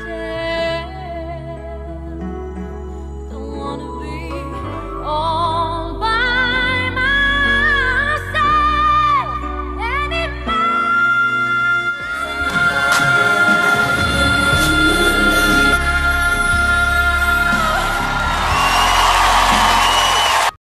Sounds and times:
Female singing: 0.0 - 1.9, 3.3 - 18.5
Music: 0.0 - 20.6.

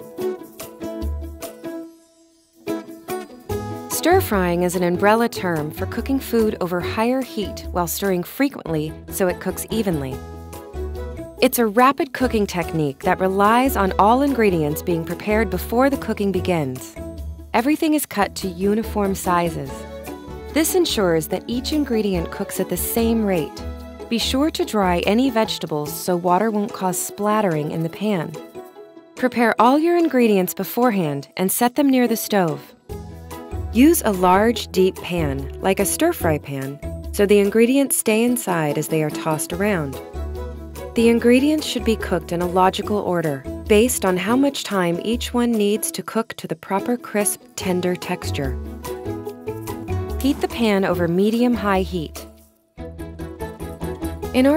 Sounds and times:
Music: 0.0 - 54.5
Speech: 4.0 - 10.2, 11.4 - 16.9, 17.6 - 19.8, 20.6 - 28.4, 29.2 - 32.7, 33.8 - 40.0, 41.0 - 48.6, 50.2 - 52.2, 54.4 - 54.5.

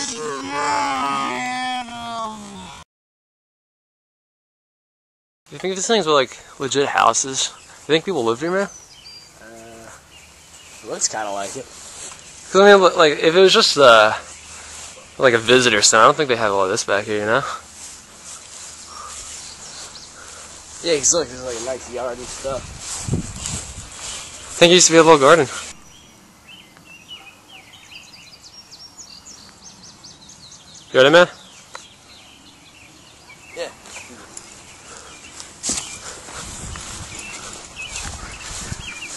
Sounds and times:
Environmental noise: 0.0 - 2.8, 5.5 - 39.1
Outside, rural or natural: 0.0 - 2.8, 5.5 - 39.1
Bird vocalization, bird call, bird song: 7.0 - 12.5, 18.7 - 20.5, 25.7 - 39.1
Speech: 24.6 - 25.6.

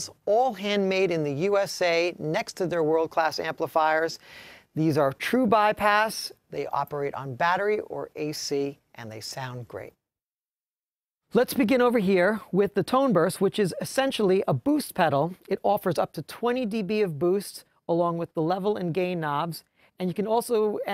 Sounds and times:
Speech: 0.0 - 4.2, 4.8 - 10.0, 11.3 - 20.9.

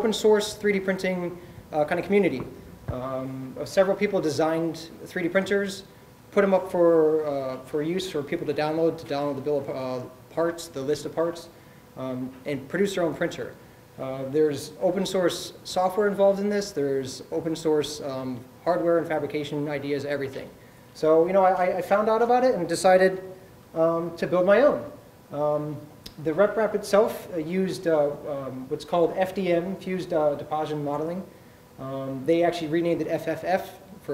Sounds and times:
Speech: 0.0 - 34.1.

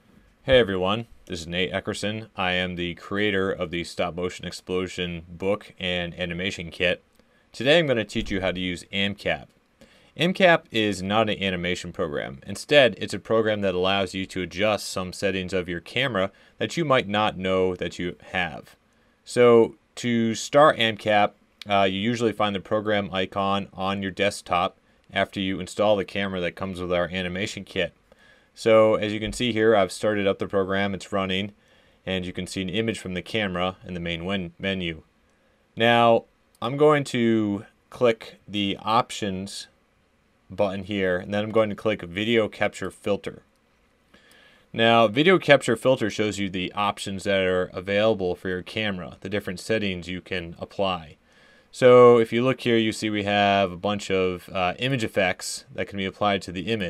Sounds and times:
Speech: 0.4 - 7.0, 7.6 - 9.5, 10.2 - 28.0, 28.6 - 35.1, 35.8 - 39.8, 40.5 - 43.5, 44.8 - 56.9.

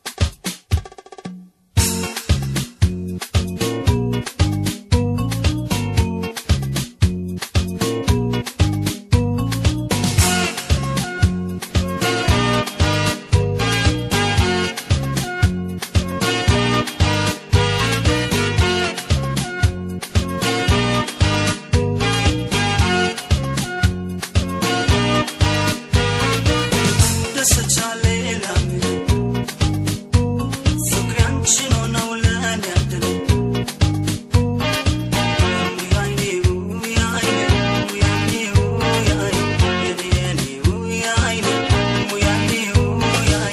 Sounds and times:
Music: 0.0 - 43.5.

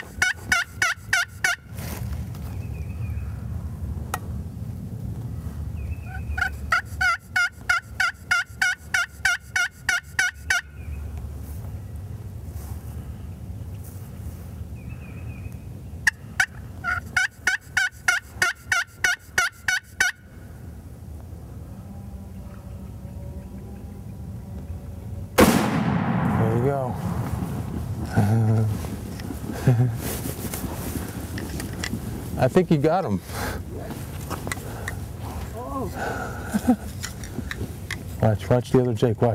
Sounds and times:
Gobble: 0.0 - 1.6, 6.1 - 10.7, 16.1 - 20.2.

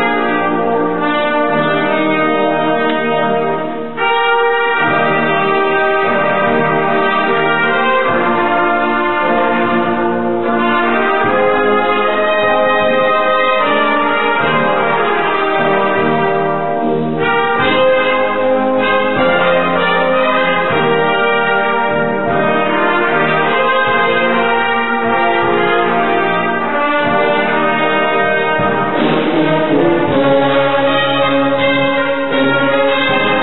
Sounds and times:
Trumpet: 0.0 - 33.4.

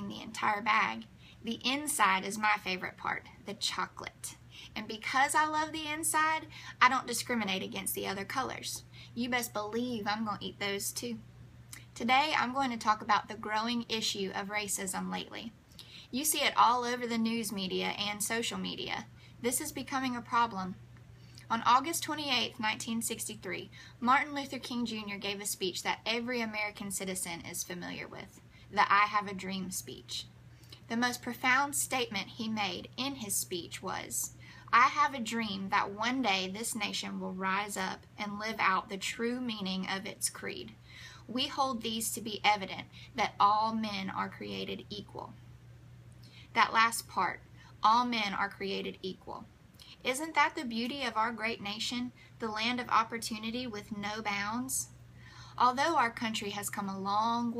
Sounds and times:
Female speech, woman speaking: 0.0 - 11.2, 11.8 - 20.8, 21.5 - 30.3, 30.9 - 45.4, 46.5 - 54.9, 55.6 - 57.5
Narration, monologue: 0.0 - 57.5.

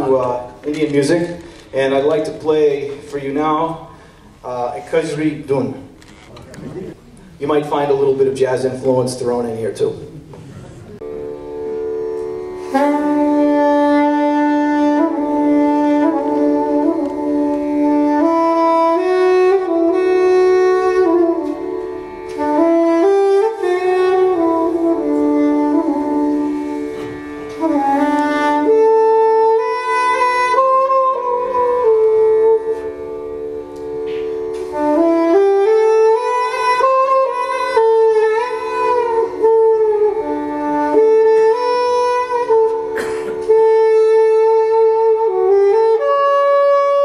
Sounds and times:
Flute: 11.0 - 47.0.

